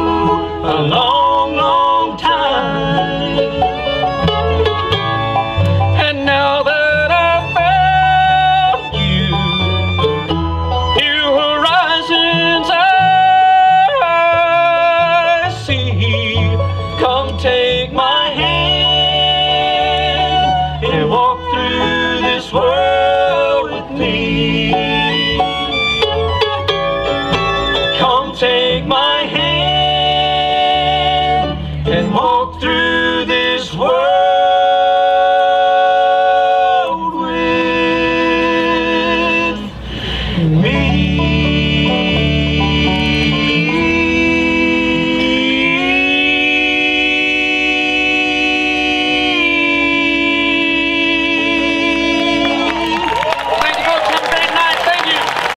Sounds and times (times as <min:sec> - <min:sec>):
Singing: 0:40.5 - 0:53.4
Speech: 0:53.5 - 0:55.3.